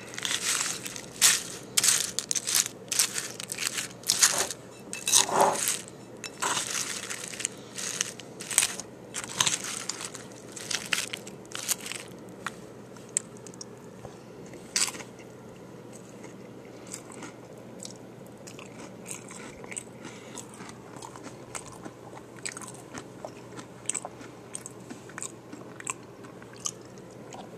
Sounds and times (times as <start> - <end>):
Crackle: 0.0 - 13.6
Crunch: 0.0 - 13.7, 15.9 - 27.5.